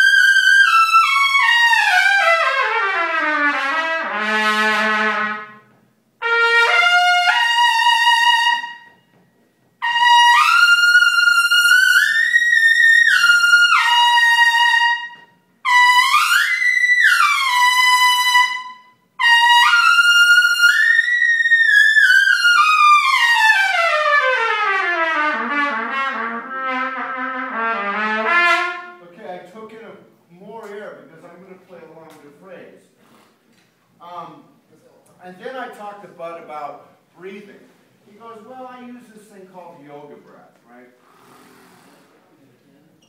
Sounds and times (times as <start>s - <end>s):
Trumpet: 0.0s - 9.1s, 9.8s - 29.7s.